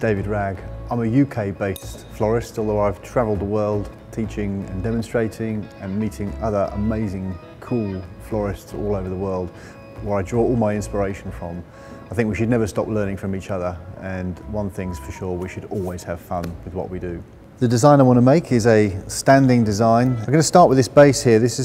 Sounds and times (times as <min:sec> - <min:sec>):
Music: 0:00.0 - 0:21.6
Speech: 0:00.0 - 0:21.6.